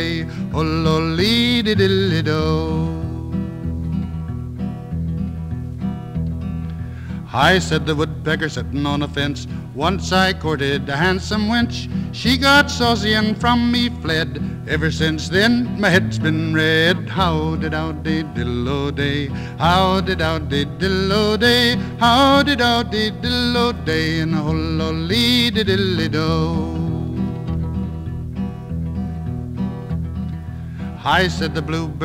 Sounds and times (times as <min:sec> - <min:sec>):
Music: 0:00.0 - 0:32.0.